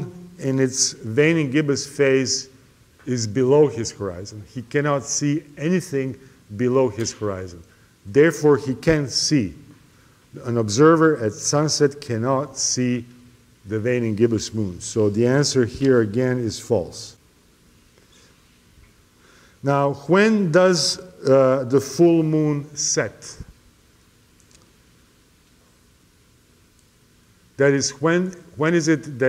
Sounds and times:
Speech: 0:00.0 - 0:09.7, 0:10.3 - 0:17.2, 0:19.6 - 0:23.5, 0:27.6 - 0:29.2.

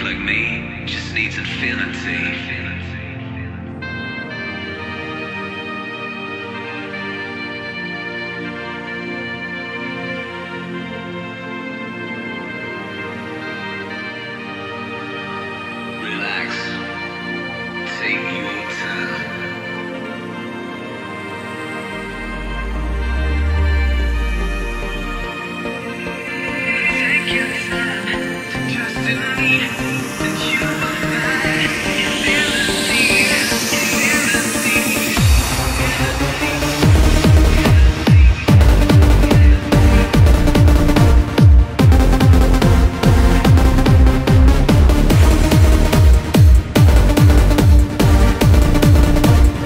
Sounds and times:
Techno: 0:00.0 - 0:49.6.

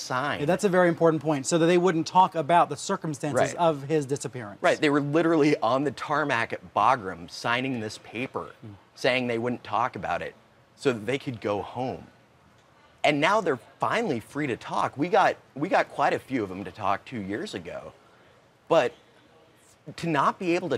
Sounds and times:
Speech: 0:00.0 - 0:12.1, 0:13.0 - 0:18.0, 0:18.7 - 0:20.7.

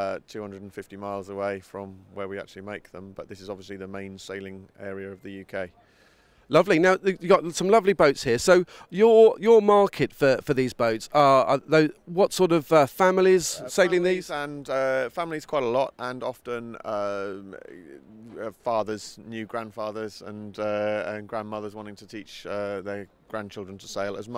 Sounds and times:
Speech: 0:00.0 - 0:05.8, 0:06.5 - 0:24.3.

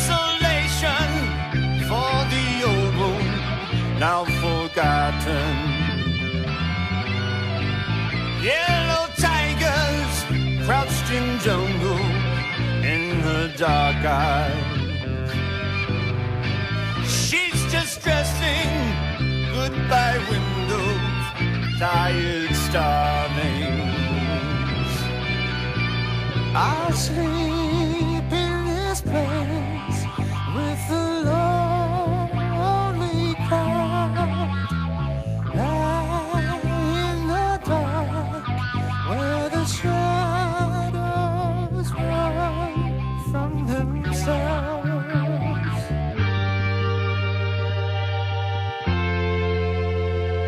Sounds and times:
Progressive rock: 0:00.0 - 0:50.4.

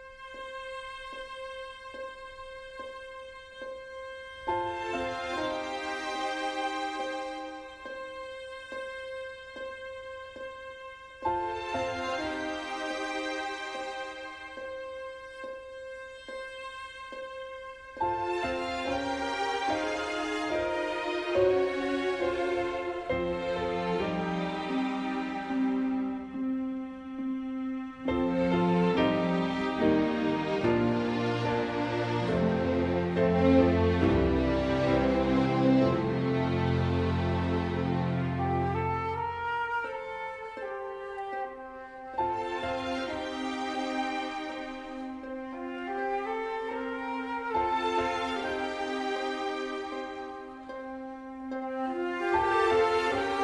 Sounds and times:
Music: 0:00.0 - 0:53.4.

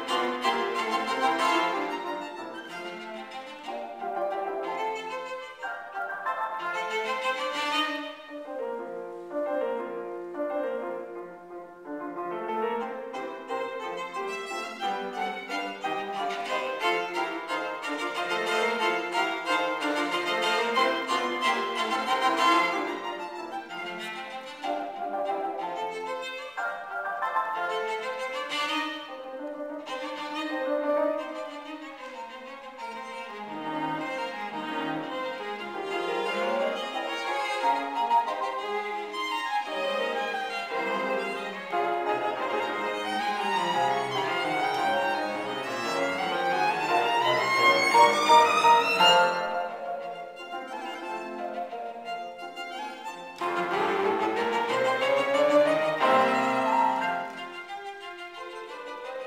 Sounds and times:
Cello: 0:00.0 - 0:59.2
Violin, fiddle: 0:00.0 - 0:59.2.

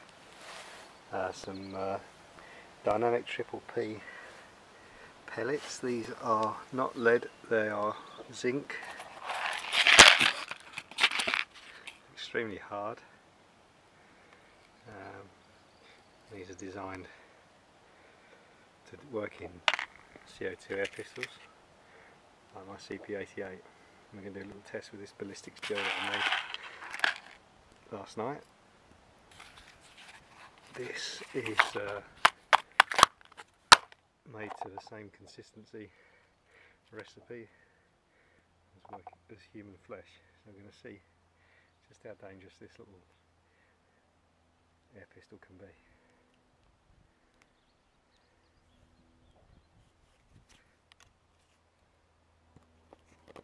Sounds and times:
Outside, urban or manmade: 0:00.0 - 0:53.4
Speech: 0:01.1 - 0:02.1, 0:02.8 - 0:04.1, 0:05.3 - 0:08.8, 0:12.2 - 0:13.1, 0:14.8 - 0:15.3, 0:16.3 - 0:17.2, 0:18.8 - 0:19.6, 0:20.3 - 0:21.4, 0:22.5 - 0:26.4, 0:27.9 - 0:28.5, 0:30.8 - 0:32.1, 0:34.3 - 0:36.0, 0:36.9 - 0:37.6, 0:38.8 - 0:41.1, 0:41.8 - 0:43.1, 0:44.9 - 0:46.0.

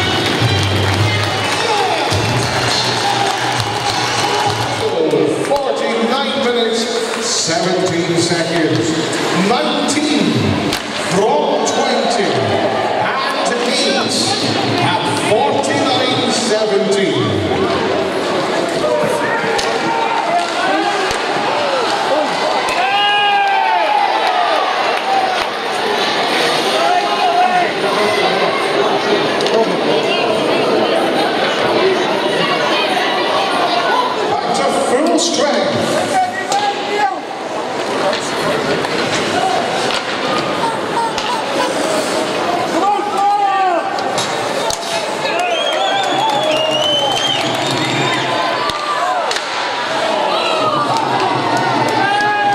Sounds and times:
Inside, public space: 0:00.0 - 0:52.5
Speech: 0:04.8 - 0:17.9.

